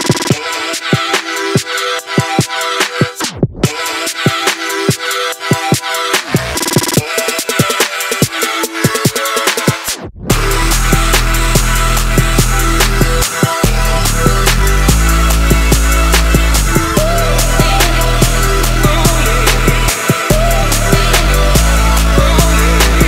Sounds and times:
Music: 0.0 - 23.0.

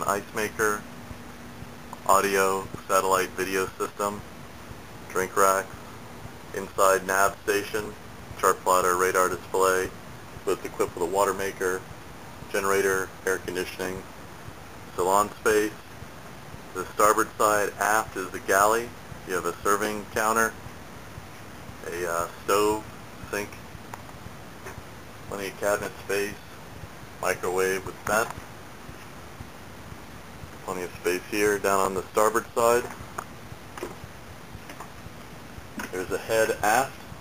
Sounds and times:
Speech: 0.0 - 0.9, 2.0 - 4.3, 5.1 - 5.8, 6.5 - 11.9, 12.5 - 14.1, 14.9 - 15.9, 16.7 - 20.6, 21.8 - 23.6, 25.3 - 26.6, 27.2 - 28.4, 30.6 - 32.9, 35.8 - 37.0.

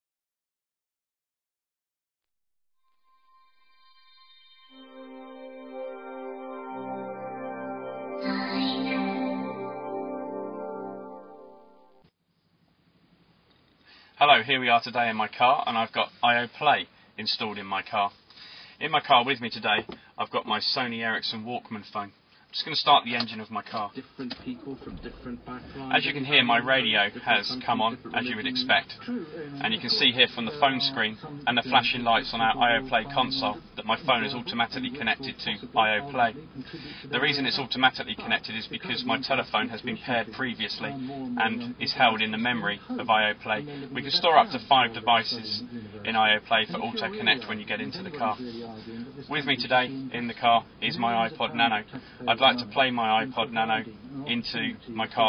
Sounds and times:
Speech: 8.2 - 9.6, 14.2 - 18.2, 18.8 - 55.2.

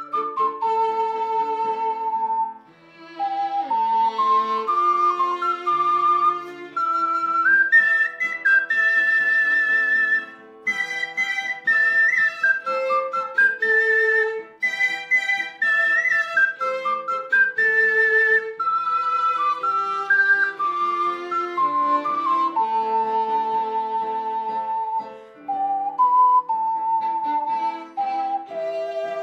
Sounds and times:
Music: 0.0 - 29.2.

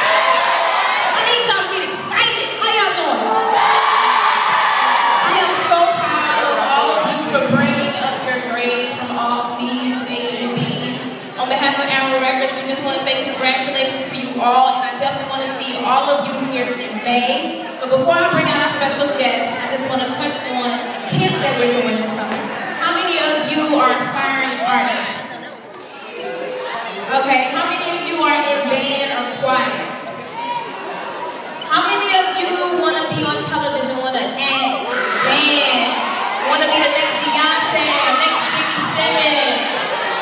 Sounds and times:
Speech: 1.2 - 3.3, 5.2 - 25.8, 26.8 - 30.1, 31.7 - 39.8.

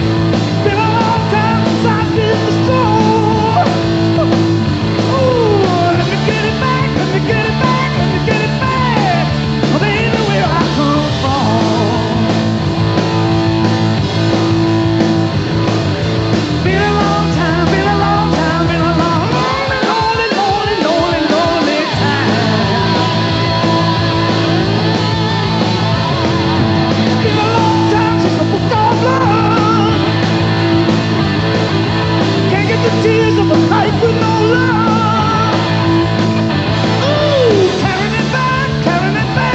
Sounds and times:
Rock and roll: 0.0 - 39.5.

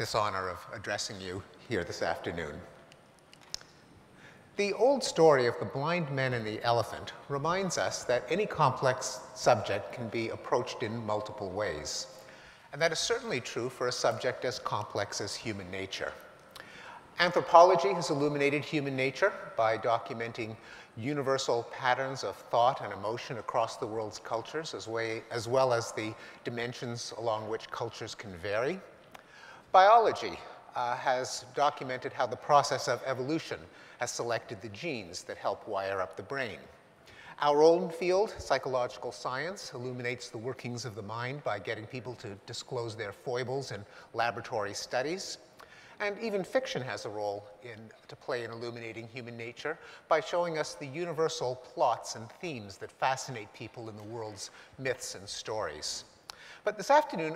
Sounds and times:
Male speech, man speaking: 0.0 - 2.8, 4.6 - 12.1, 12.7 - 16.3, 17.2 - 28.9, 29.7 - 36.8, 37.4 - 57.3.

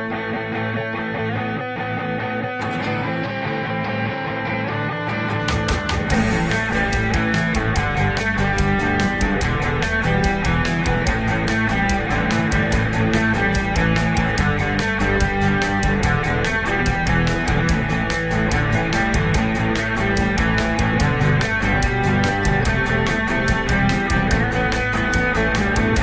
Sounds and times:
Progressive rock: 0.0 - 26.0.

